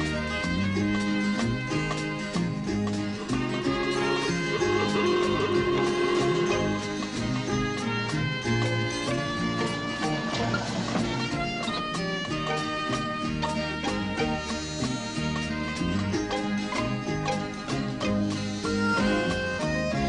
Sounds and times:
Music: 0.0s - 20.0s.

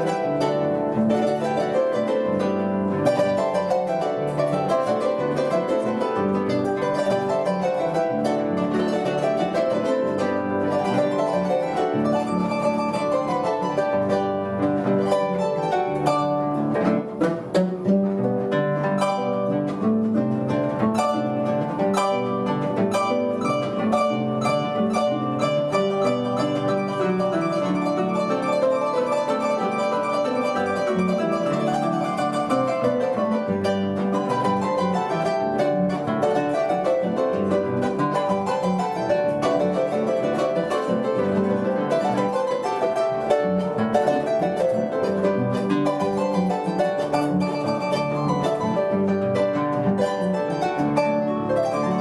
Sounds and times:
Music: 0.0s - 52.0s.

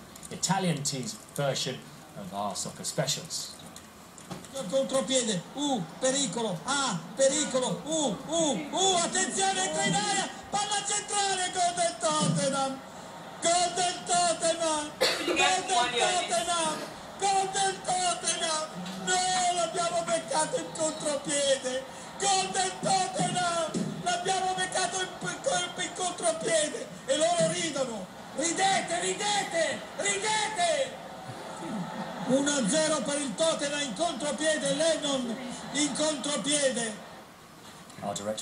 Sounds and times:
Speech: 0.3s - 3.6s, 4.5s - 12.8s, 13.4s - 31.0s.

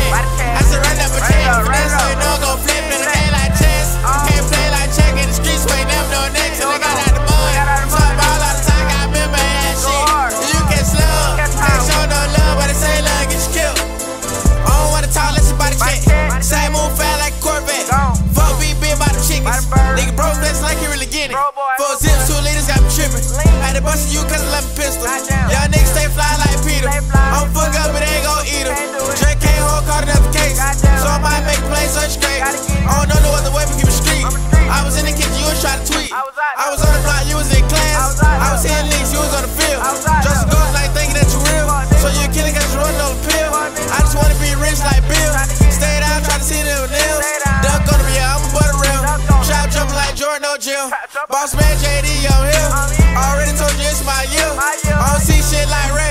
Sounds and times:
Music: 0.0s - 50.3s, 51.5s - 56.1s.

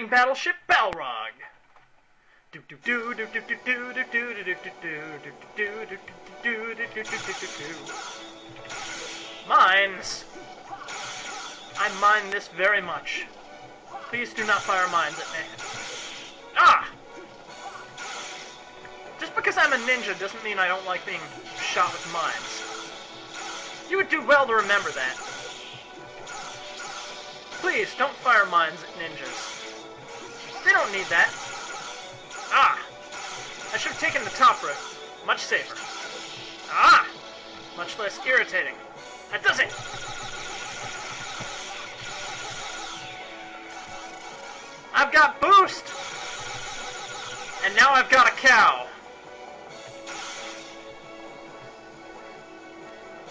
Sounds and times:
Speech: 0.0s - 1.5s, 9.5s - 10.2s, 23.9s - 25.2s, 27.6s - 29.3s, 33.7s - 35.8s, 36.7s - 37.2s, 37.8s - 39.7s, 45.0s - 45.9s, 47.6s - 48.9s.

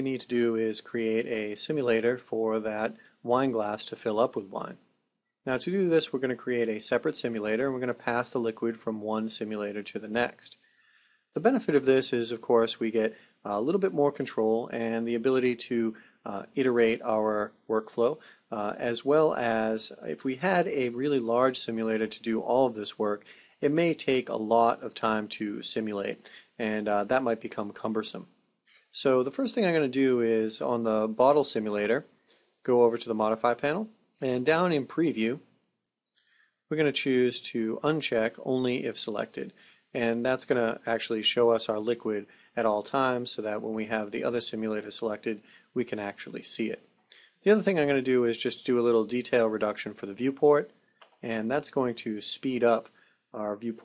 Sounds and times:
Speech: 0.0s - 4.8s, 5.5s - 10.6s, 11.4s - 28.3s, 29.0s - 35.4s, 36.7s - 46.8s, 47.4s - 53.8s.

